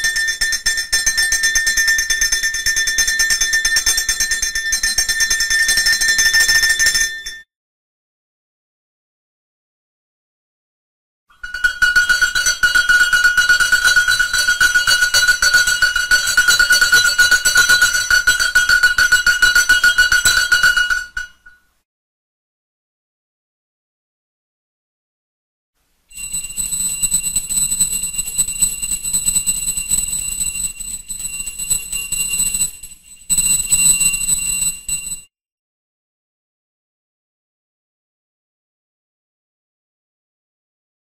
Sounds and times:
Bell: 0:00.0 - 0:07.5, 0:11.3 - 0:21.6, 0:26.1 - 0:35.3.

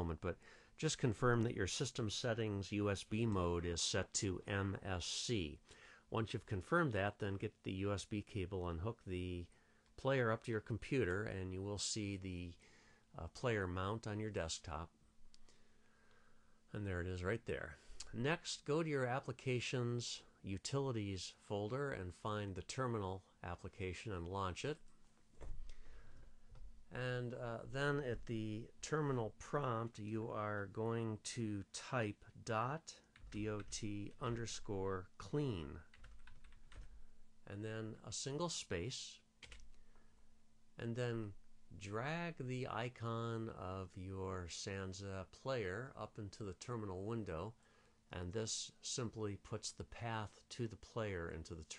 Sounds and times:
Speech: 0:00.0 - 0:15.0, 0:16.7 - 0:24.8, 0:26.9 - 0:35.9, 0:37.4 - 0:39.3, 0:40.8 - 0:51.7.

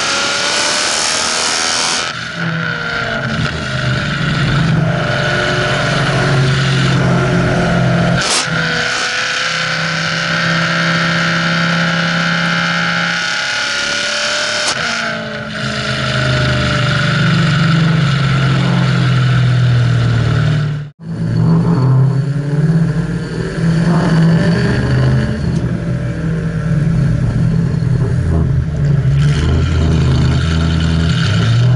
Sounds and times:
Accelerating, revving, vroom: 0:00.0 - 0:20.8, 0:21.4 - 0:25.6, 0:29.2 - 0:31.7
Car: 0:00.0 - 0:31.7.

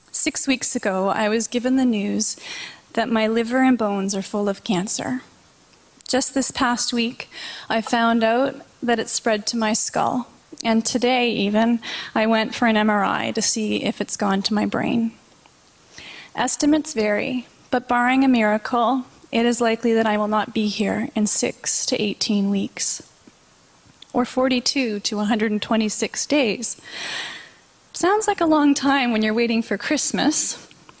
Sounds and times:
Female speech, woman speaking: 0:00.2 - 0:02.4, 0:03.0 - 0:05.3, 0:06.1 - 0:15.2, 0:16.4 - 0:23.1, 0:24.2 - 0:26.8, 0:28.0 - 0:30.7.

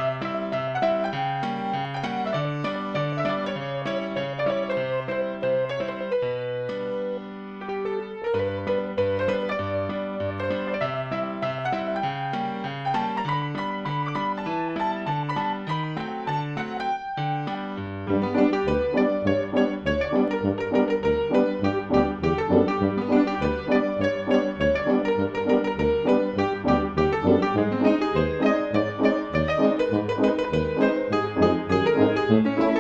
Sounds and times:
Soundtrack music: 0:18.1 - 0:32.8.

